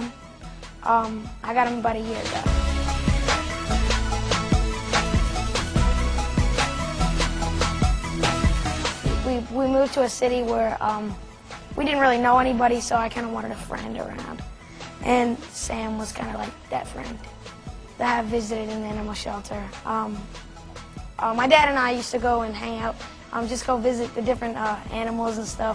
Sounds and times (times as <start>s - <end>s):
Music: 0.0s - 25.7s
Speech: 0.8s - 2.5s, 9.2s - 11.2s, 11.8s - 14.4s, 15.0s - 17.3s, 18.0s - 20.3s, 21.2s - 25.7s.